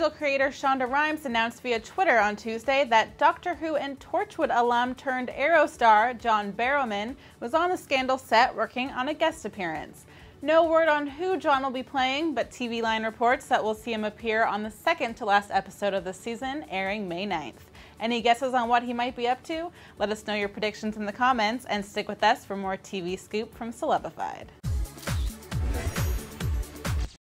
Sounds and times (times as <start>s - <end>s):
Speech: 0.0s - 24.5s
Music: 0.0s - 27.2s.